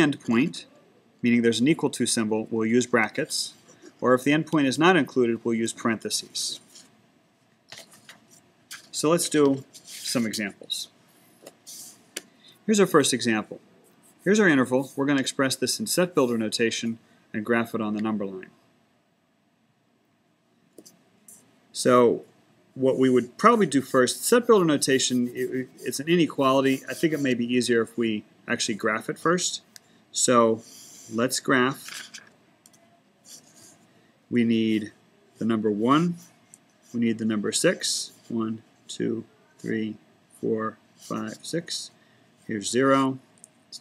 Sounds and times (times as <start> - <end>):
Speech: 0.0 - 6.7, 8.9 - 11.0, 12.7 - 13.6, 14.2 - 18.6, 21.8 - 31.9, 34.3 - 36.3, 37.0 - 43.8.